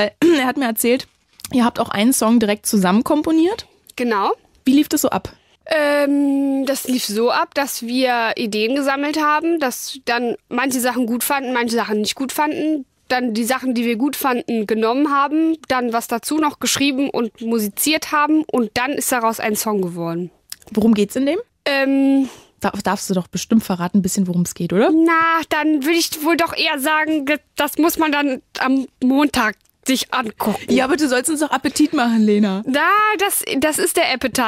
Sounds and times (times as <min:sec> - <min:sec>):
Speech: 0:00.0 - 0:34.4.